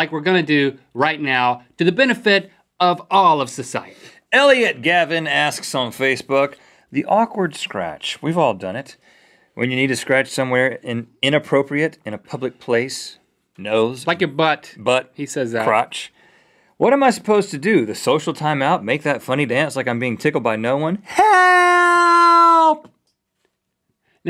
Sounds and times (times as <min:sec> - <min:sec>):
Speech: 0:00.0 - 0:09.0, 0:09.6 - 0:16.2, 0:16.8 - 0:22.9.